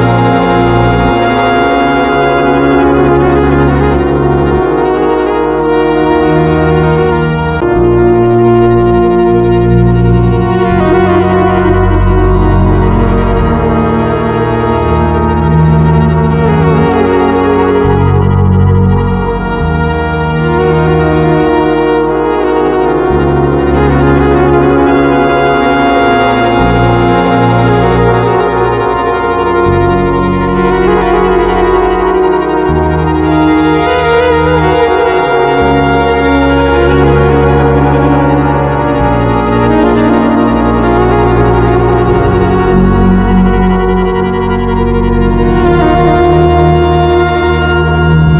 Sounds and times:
Music: 0.0 - 48.3.

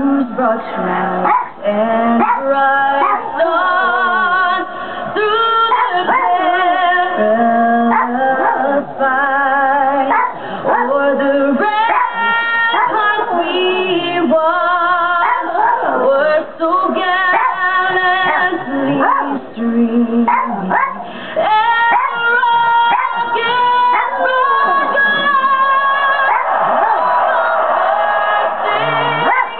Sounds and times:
Female singing: 0.0 - 29.5.

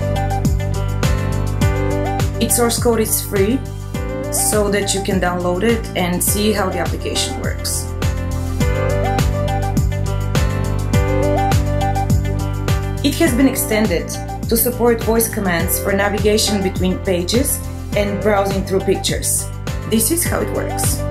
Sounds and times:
Music: 0.0 - 21.1
Female speech, woman speaking: 2.4 - 3.7, 4.4 - 7.9, 13.0 - 21.1.

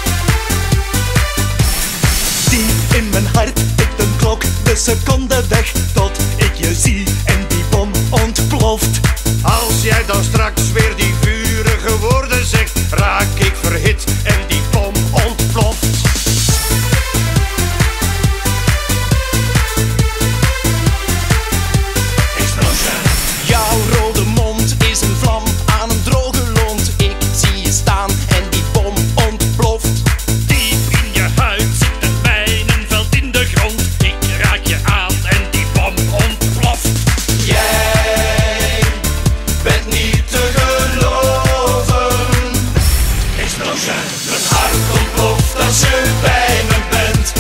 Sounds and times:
Music: 0.0 - 47.4.

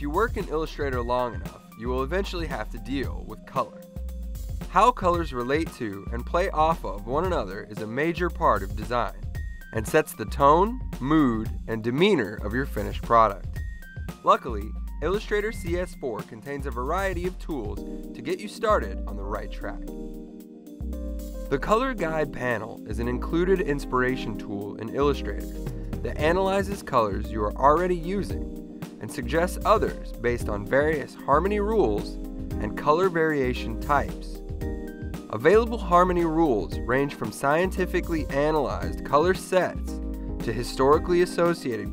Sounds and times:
Speech: 0.0 - 3.8, 4.7 - 9.2, 9.8 - 13.5, 14.2 - 19.8, 21.5 - 28.4, 29.0 - 34.4, 35.3 - 41.9
Music: 0.0 - 41.9.

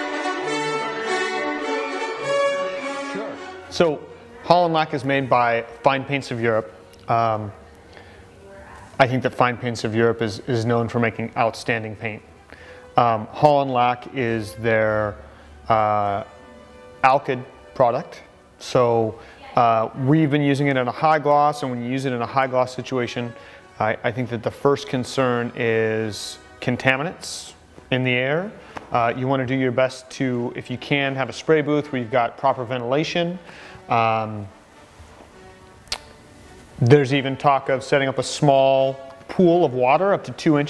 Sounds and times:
Music: 0.0 - 40.7
Speech: 3.2 - 7.6, 8.4 - 12.3, 13.0 - 16.3, 17.0 - 34.5, 36.8 - 40.7.

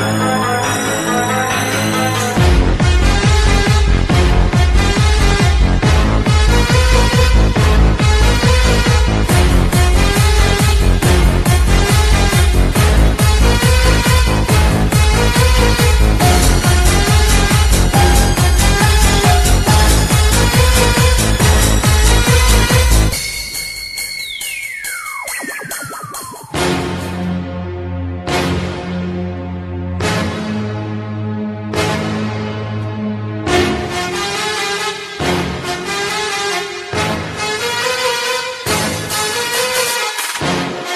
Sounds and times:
Soundtrack music: 0.0 - 40.9.

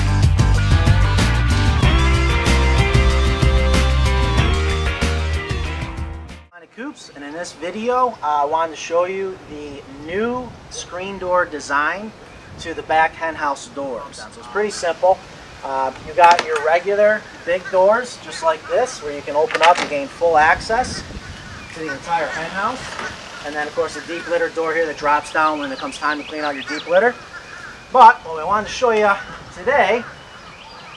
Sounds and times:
Speech: 6.6 - 21.0, 21.7 - 27.2, 27.9 - 30.1.

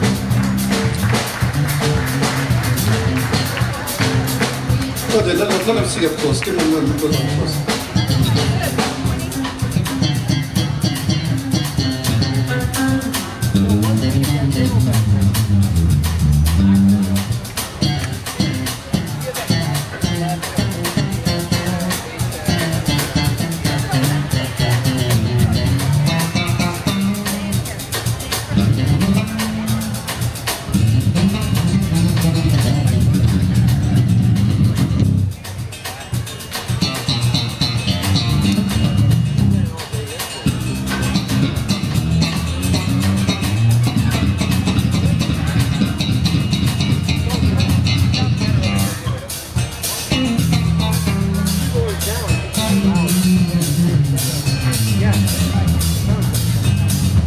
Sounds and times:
Drum: 0.0 - 57.2
Guitar: 0.0 - 57.2
Jazz: 0.0 - 57.2
Rock and roll: 0.0 - 57.2
Speech: 0.0 - 57.2.

